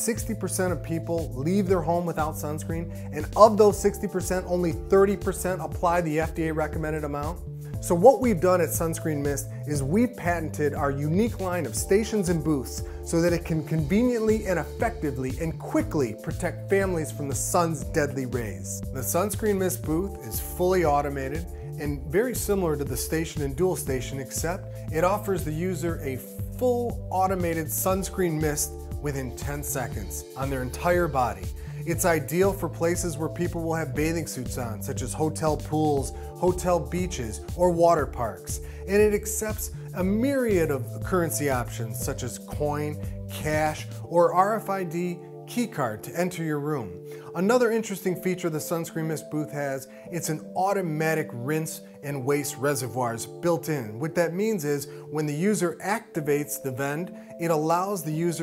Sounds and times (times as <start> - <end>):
Music: 0.0 - 58.4
Speech: 0.0 - 58.4.